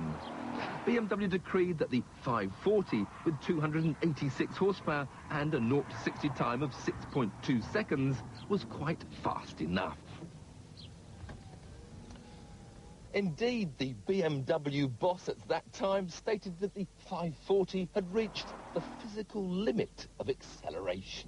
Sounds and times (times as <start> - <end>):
Speech: 0.8 - 10.1, 13.2 - 21.2.